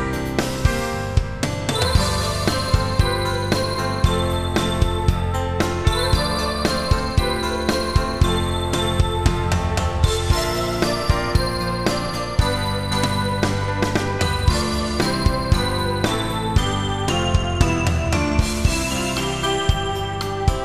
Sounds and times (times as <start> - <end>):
Music: 0.0 - 20.6.